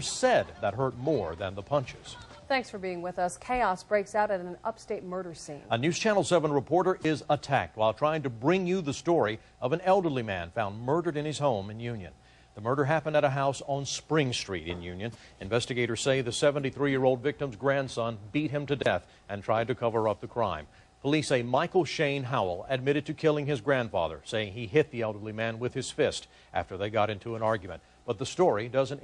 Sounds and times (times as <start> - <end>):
Speech: 0.0 - 29.0.